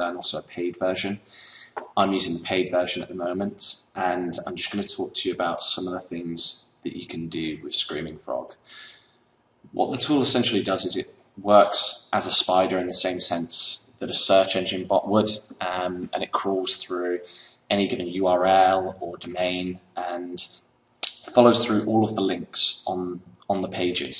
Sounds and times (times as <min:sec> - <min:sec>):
Speech: 0:00.0 - 0:09.0, 0:09.7 - 0:24.1.